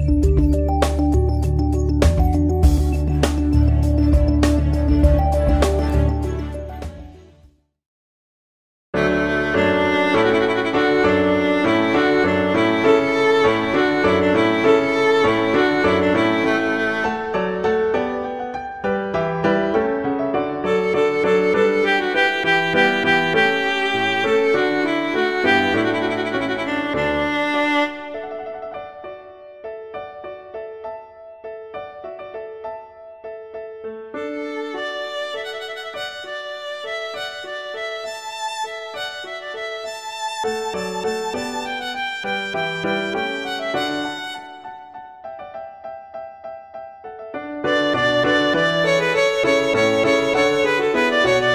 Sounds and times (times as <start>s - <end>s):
Violin, fiddle: 9.0s - 17.4s, 20.7s - 28.4s, 34.2s - 44.6s, 47.7s - 51.5s.